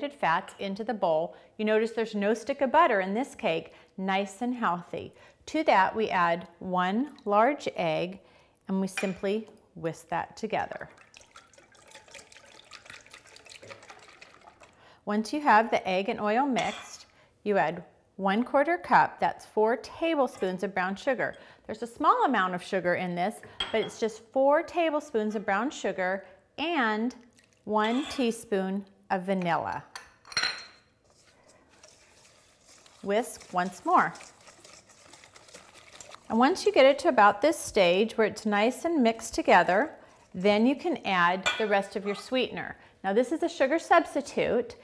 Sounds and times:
Stir: 10.8 - 14.8, 27.2 - 28.4, 30.8 - 37.1, 39.3 - 42.5.

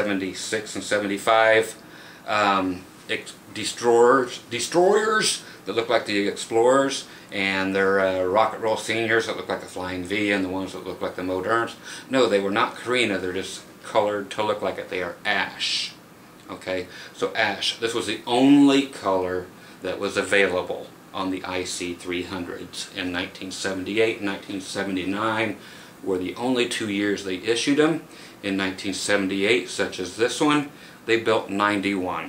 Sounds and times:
Speech: 0.0 - 32.2.

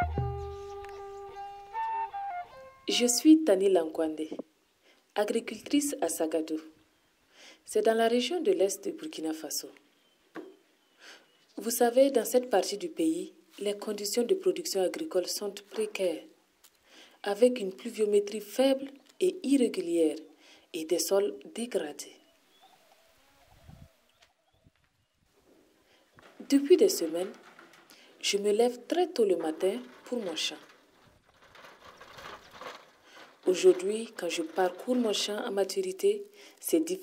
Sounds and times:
Speech: 2.9 - 4.4, 5.2 - 6.8, 7.7 - 9.8, 11.6 - 16.4, 17.2 - 22.2, 26.4 - 27.4, 28.2 - 30.7, 33.4 - 37.0.

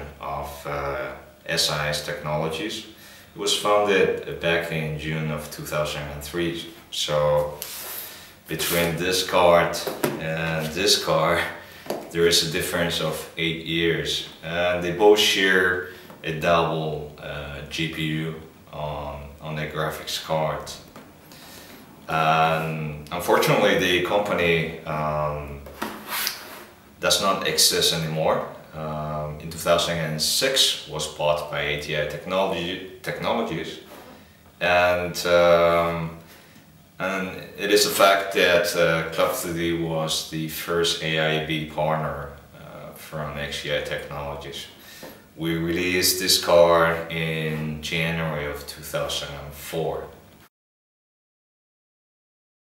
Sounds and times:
Speech: 0.0 - 7.8, 8.5 - 20.9, 22.1 - 25.7, 27.0 - 34.0, 34.6 - 36.2, 37.0 - 44.8, 45.4 - 50.2.

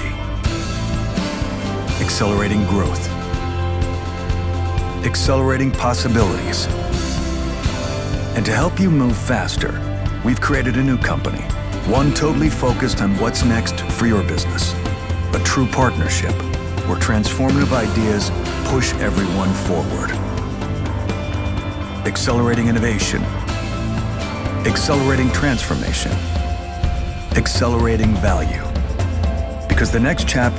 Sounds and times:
Speech: 0.0 - 0.2, 2.0 - 3.2, 5.0 - 6.8, 8.4 - 20.2, 22.0 - 23.3, 24.6 - 26.3, 27.4 - 28.8, 29.7 - 30.5
Music: 0.0 - 30.5.

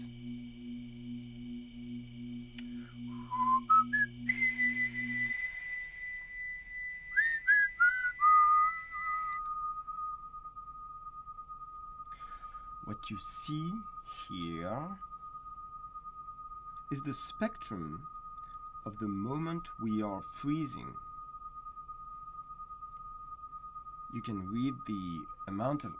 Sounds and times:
Humming: 0.0 - 25.9.

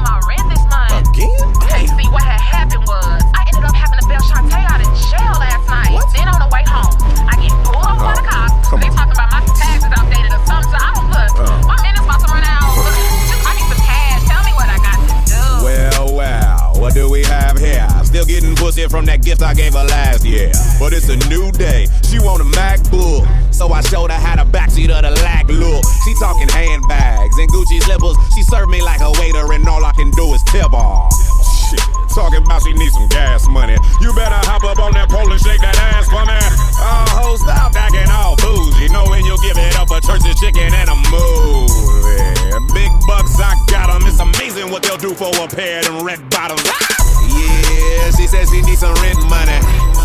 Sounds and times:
Soundtrack music: 0.0 - 50.0.

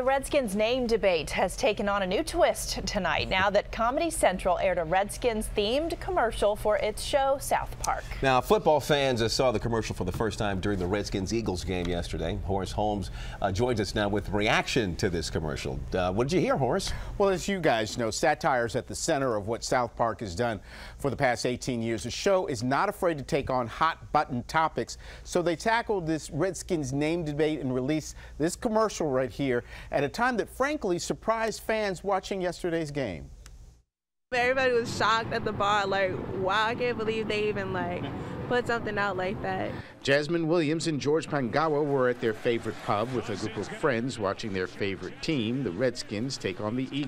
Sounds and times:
Speech: 34.4 - 47.0.

